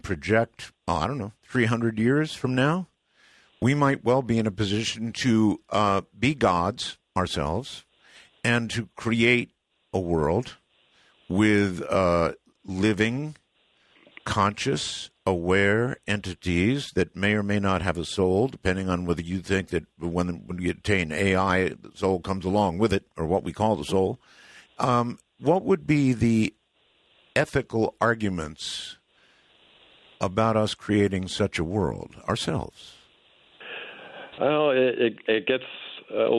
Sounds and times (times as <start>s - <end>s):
Speech: 0.0s - 2.9s, 3.6s - 7.8s, 8.4s - 10.6s, 11.3s - 13.4s, 14.1s - 24.2s, 24.8s - 26.5s, 27.4s - 29.0s, 30.2s - 33.0s, 33.6s - 36.3s.